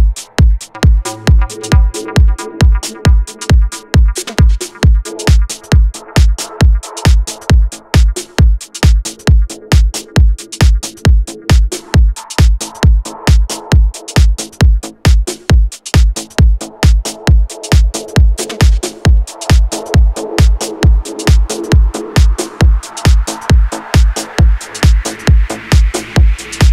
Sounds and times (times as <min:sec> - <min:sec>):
Music: 0:00.0 - 0:26.7.